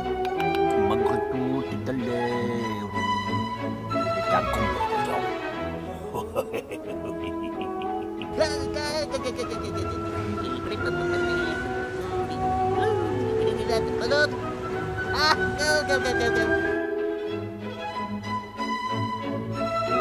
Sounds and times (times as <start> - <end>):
Music: 0.0 - 20.0
Speech: 0.4 - 2.9, 4.3 - 5.3, 15.1 - 16.5.